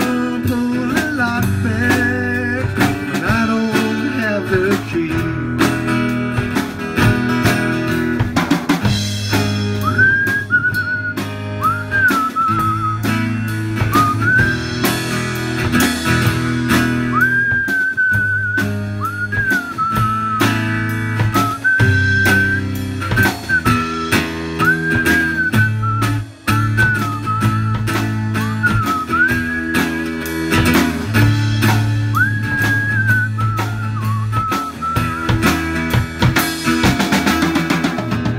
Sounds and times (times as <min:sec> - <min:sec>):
Music: 0:00.0 - 0:38.3
Whistling: 0:09.6 - 0:15.2, 0:16.8 - 0:30.4, 0:32.0 - 0:35.9.